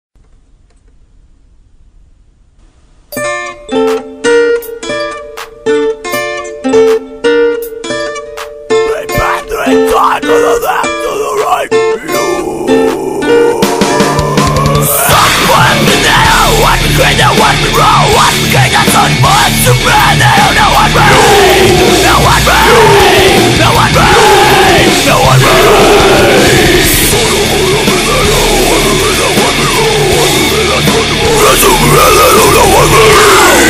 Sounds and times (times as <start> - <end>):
Ukulele: 3.1 - 15.1.